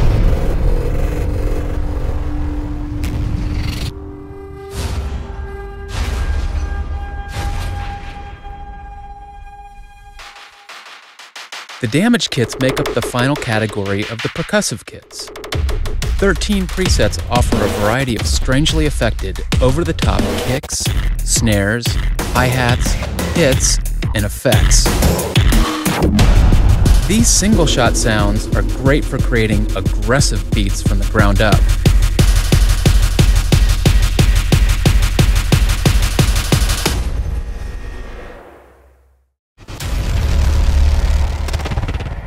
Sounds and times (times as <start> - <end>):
Music: 2.6 - 14.4, 15.3 - 37.6.